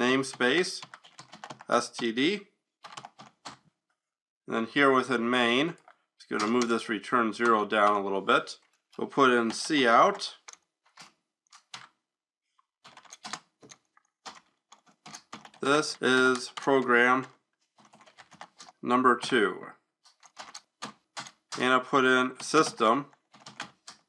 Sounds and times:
Speech: 0.0s - 0.9s, 1.7s - 2.5s, 4.5s - 10.4s, 15.6s - 17.3s, 18.8s - 19.8s, 21.6s - 23.1s
Computer keyboard: 0.3s - 2.1s, 2.8s - 3.6s, 5.8s - 6.8s, 9.4s - 11.9s, 12.8s - 18.8s, 20.1s - 21.7s, 22.4s - 24.0s.

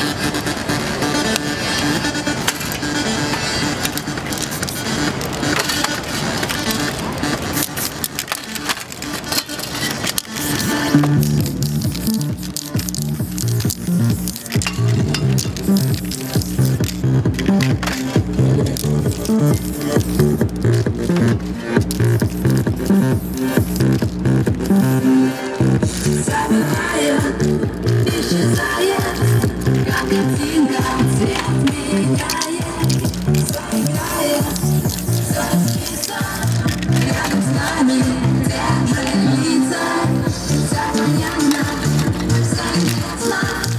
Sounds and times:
Music: 0.0s - 43.7s
Spray: 19.0s - 20.4s, 21.9s - 24.0s, 32.8s - 36.6s.

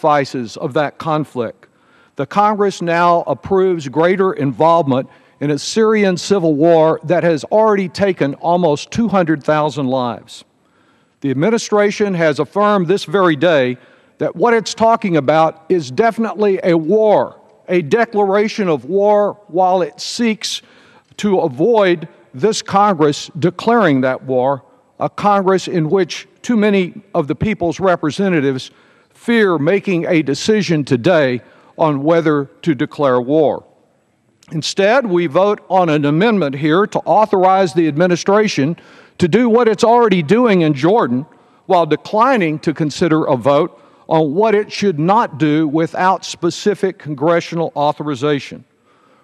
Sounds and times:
Male speech, man speaking: 0.0s - 1.6s, 2.2s - 10.4s, 11.2s - 20.6s, 21.2s - 33.6s, 34.5s - 48.6s
Narration, monologue: 0.0s - 49.2s.

